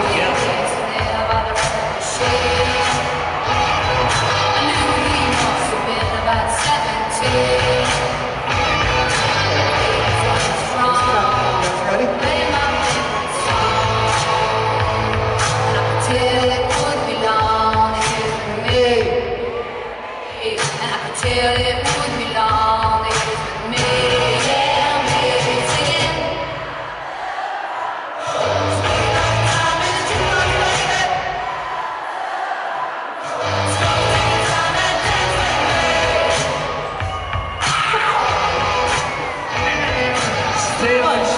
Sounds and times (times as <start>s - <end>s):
Female singing: 0.0s - 3.2s, 4.5s - 8.2s, 9.5s - 19.5s, 20.3s - 26.5s, 28.6s - 31.2s, 33.7s - 36.6s
Music: 0.0s - 19.6s, 20.6s - 26.6s, 28.4s - 31.4s, 33.3s - 41.3s.